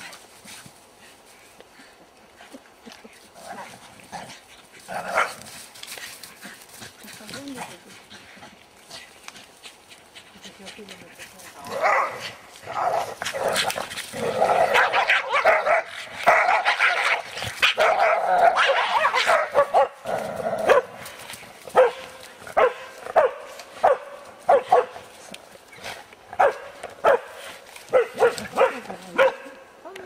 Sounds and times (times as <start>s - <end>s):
Bow-wow: 20.6s - 20.9s, 21.8s - 24.9s, 26.4s - 27.3s, 27.9s - 29.5s.